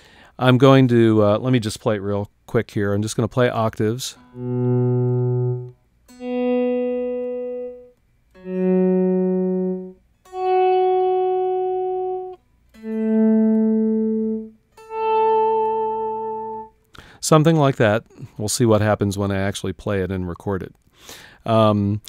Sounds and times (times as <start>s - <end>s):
Inside, small room: 0.0s - 22.0s
Guitar: 3.2s - 19.6s
Effects unit: 4.1s - 17.8s.